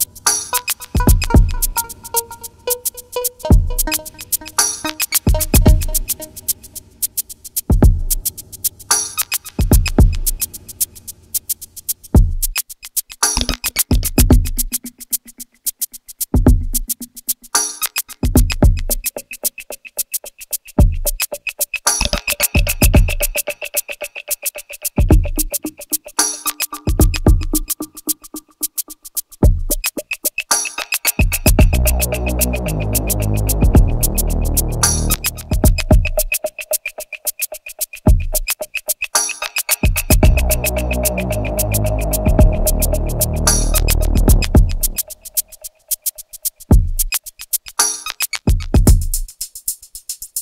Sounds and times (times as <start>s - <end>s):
Electronica: 0.0s - 7.0s, 31.3s - 37.4s, 39.9s - 45.7s.